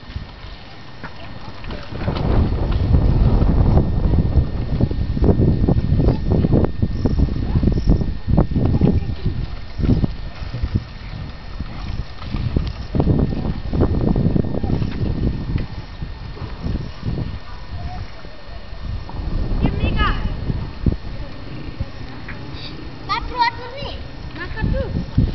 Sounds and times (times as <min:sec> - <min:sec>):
Bicycle: 0:00.0 - 0:25.3.